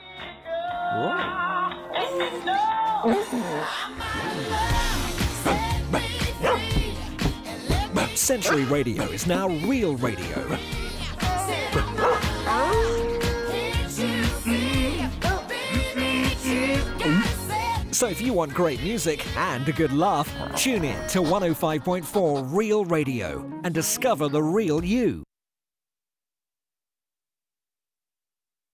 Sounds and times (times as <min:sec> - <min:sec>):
Music: 0:00.0 - 0:25.3
Speech: 0:08.1 - 0:10.6, 0:18.0 - 0:25.3.